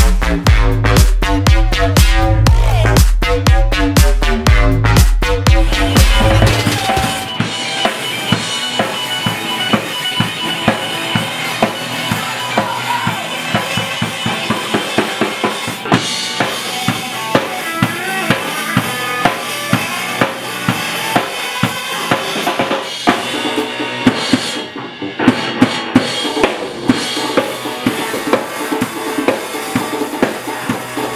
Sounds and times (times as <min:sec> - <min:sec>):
Music: 0:00.0 - 0:31.1.